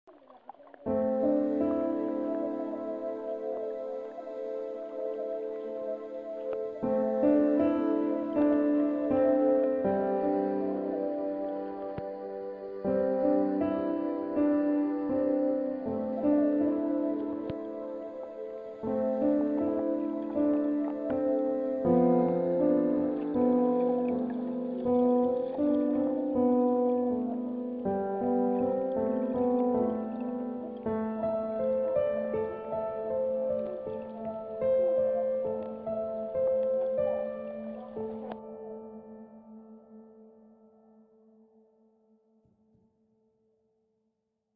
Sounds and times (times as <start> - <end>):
New-age music: 0.6 - 41.9.